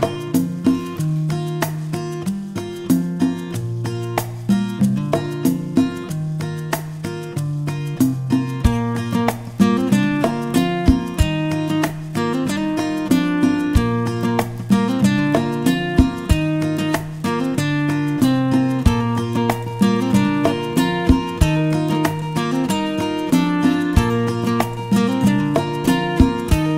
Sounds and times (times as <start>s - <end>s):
Music: 0.0s - 26.7s.